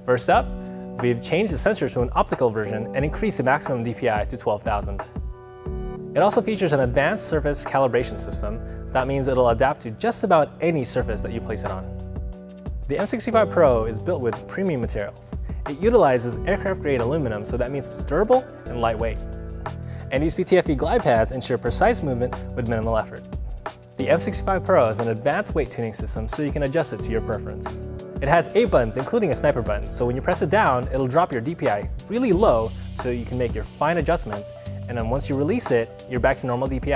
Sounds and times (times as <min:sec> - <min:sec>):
Speech: 0:00.0 - 0:05.1, 0:06.2 - 0:11.9, 0:12.9 - 0:19.2, 0:20.1 - 0:23.3, 0:24.0 - 0:36.9
Music: 0:00.0 - 0:36.9.